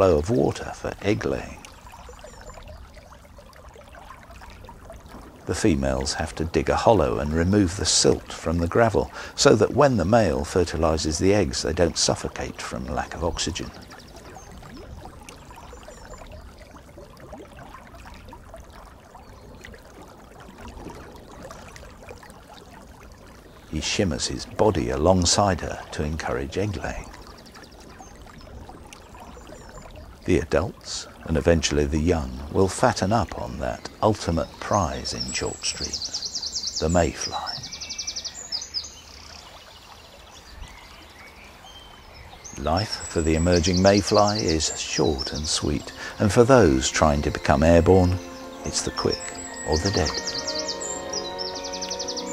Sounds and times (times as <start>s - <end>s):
Speech: 0.0s - 1.6s, 5.5s - 13.7s, 23.7s - 27.1s, 30.3s - 36.0s, 36.8s - 37.7s, 42.6s - 50.3s.